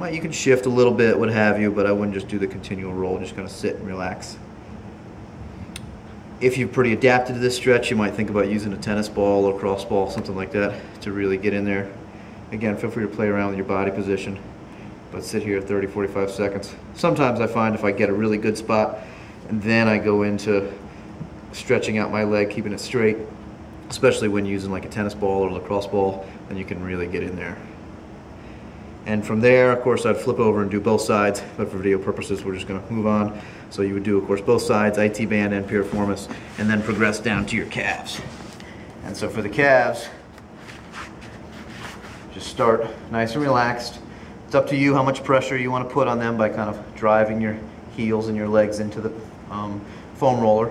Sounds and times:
Speech: 0.0s - 4.4s, 6.4s - 14.4s, 15.1s - 20.8s, 21.6s - 23.3s, 23.9s - 27.6s, 29.1s - 38.3s, 39.0s - 40.2s, 42.3s - 50.7s.

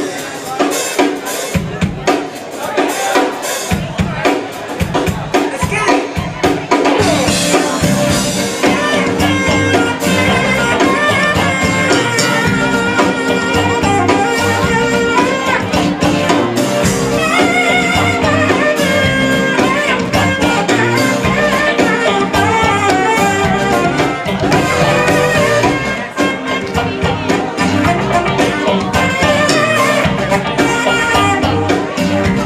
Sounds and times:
Speech: 0.0s - 32.4s
Background music: 5.6s - 32.4s.

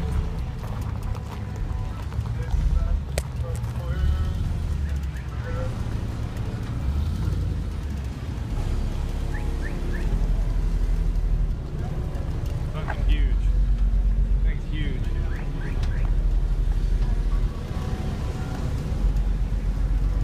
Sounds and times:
Car: 0.0s - 20.2s.

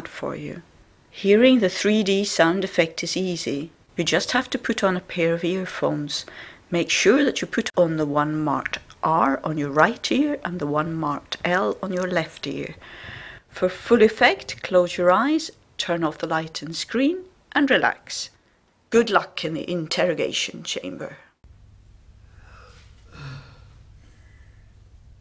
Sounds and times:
Speech: 0.0s - 0.6s, 1.2s - 12.8s, 13.6s - 21.3s.

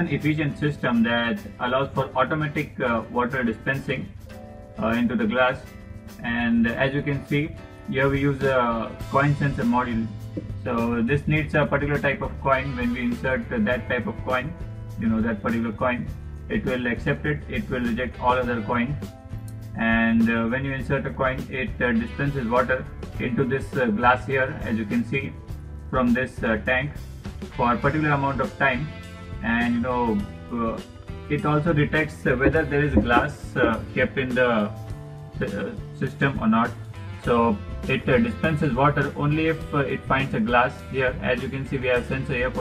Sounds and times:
Speech: 0.0s - 4.2s, 4.8s - 19.0s, 19.8s - 34.8s, 35.4s - 42.6s
Music: 0.0s - 42.6s.

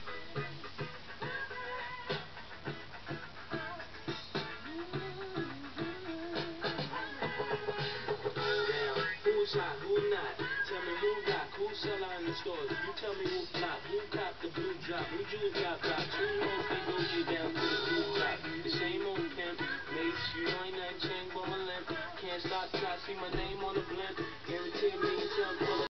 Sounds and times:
Music: 0.0s - 25.9s.

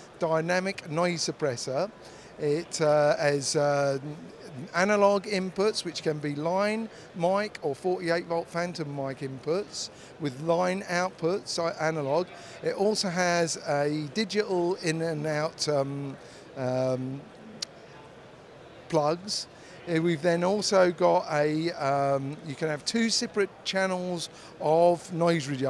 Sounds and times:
Speech: 0.2s - 17.2s, 18.9s - 25.7s.

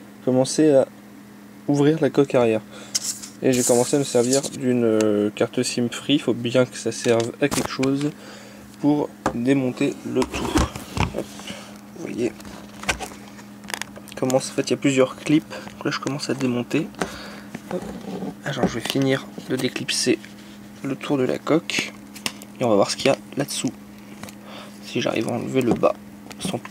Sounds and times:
Speech: 0.2s - 0.9s, 1.7s - 2.7s, 3.4s - 8.2s, 8.8s - 10.6s, 12.0s - 12.4s, 14.2s - 17.0s, 17.7s - 20.2s, 20.8s - 22.0s, 22.6s - 23.8s, 24.8s - 26.7s.

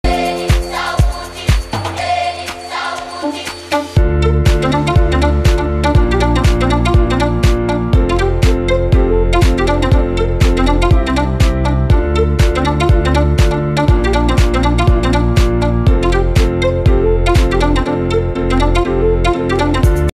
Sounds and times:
Music: 0.0s - 20.1s.

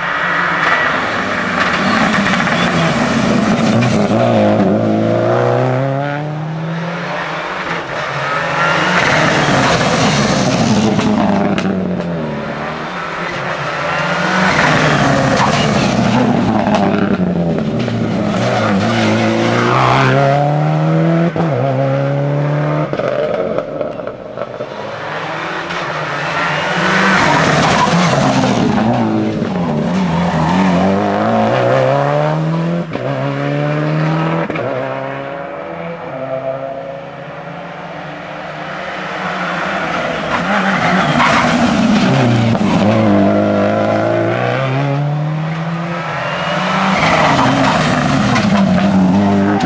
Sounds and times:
Accelerating, revving, vroom: 0.0s - 12.9s, 13.9s - 24.0s, 24.6s - 49.6s
Race car, auto racing: 0.0s - 49.6s.

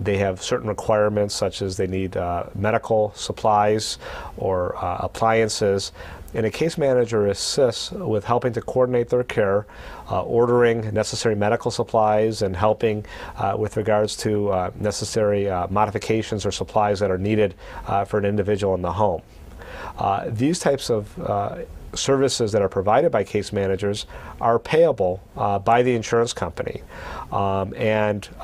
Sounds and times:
Speech: 0.0s - 19.2s, 20.0s - 28.4s.

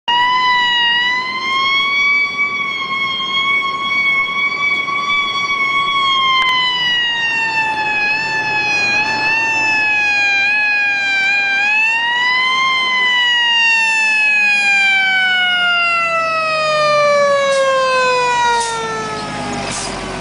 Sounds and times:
Fire engine, fire truck (siren): 0.0s - 20.2s.

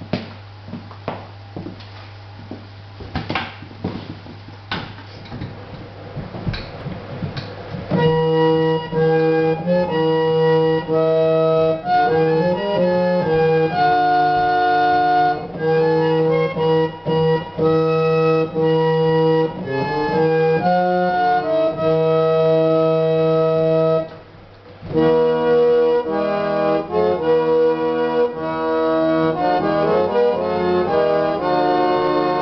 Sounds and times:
Hammond organ: 2.3s - 32.4s.

